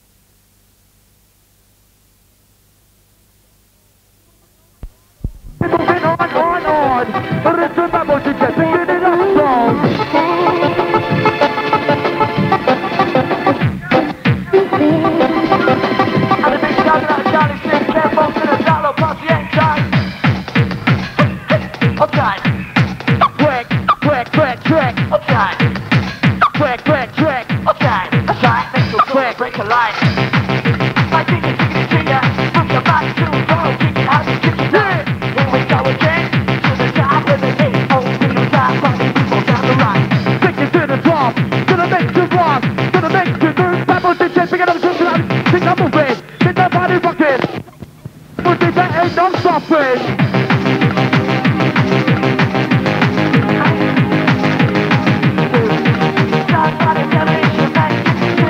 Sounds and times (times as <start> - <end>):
Techno: 5.2 - 47.7, 48.4 - 58.4.